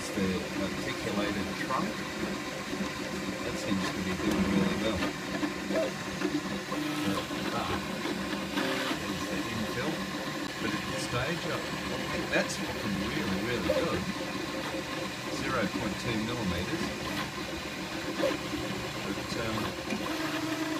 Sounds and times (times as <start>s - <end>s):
Speech: 0.0s - 2.0s, 3.4s - 5.1s, 7.4s - 7.9s, 9.0s - 10.0s, 10.6s - 14.1s, 15.3s - 16.9s, 19.0s - 19.7s.